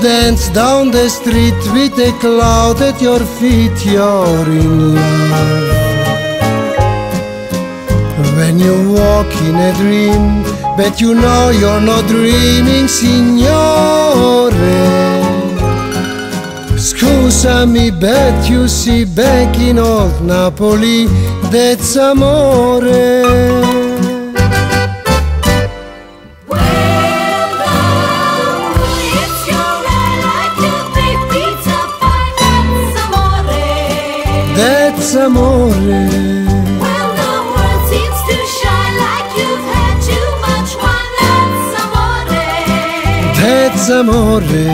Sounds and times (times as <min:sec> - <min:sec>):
Music: 0:00.0 - 0:44.7.